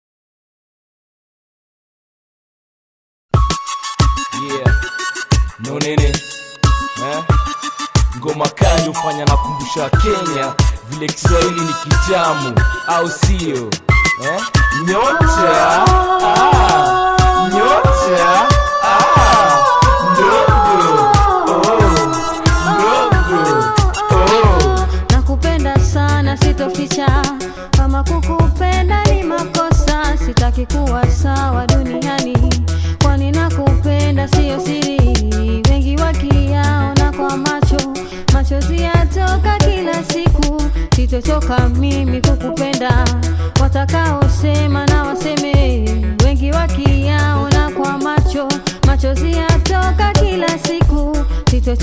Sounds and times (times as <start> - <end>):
Music: 3.3 - 51.8.